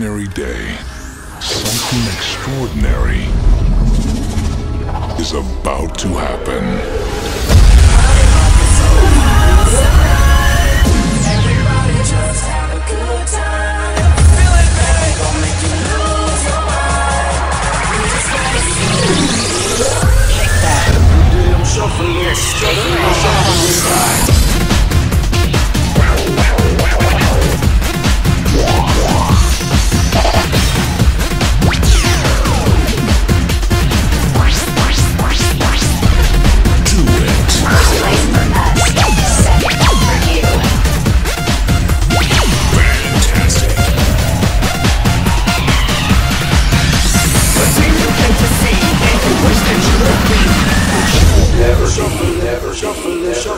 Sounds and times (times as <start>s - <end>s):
Music: 0.0s - 53.5s.